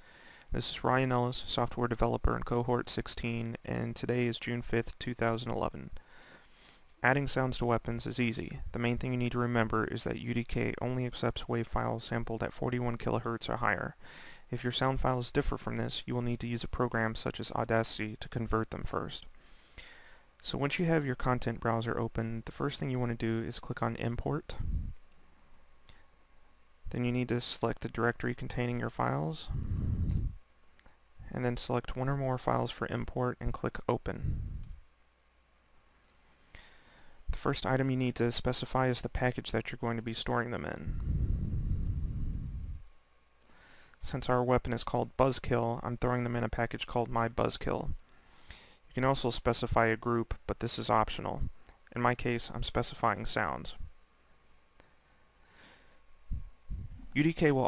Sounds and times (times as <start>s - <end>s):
Speech: 0.5s - 6.0s, 7.0s - 19.3s, 20.4s - 24.8s, 26.9s - 29.6s, 31.2s - 34.4s, 37.3s - 41.0s, 44.0s - 48.0s, 48.9s - 53.9s, 57.1s - 57.6s.